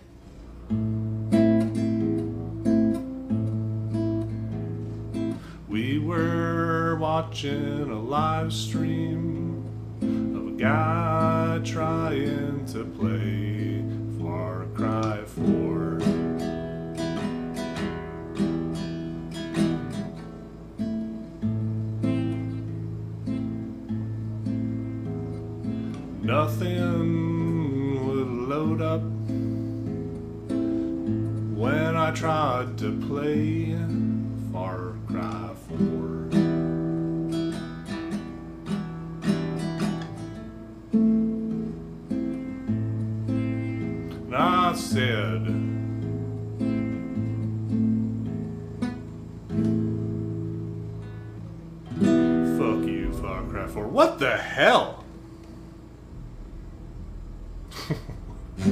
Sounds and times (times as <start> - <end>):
Strum: 0.0 - 58.7.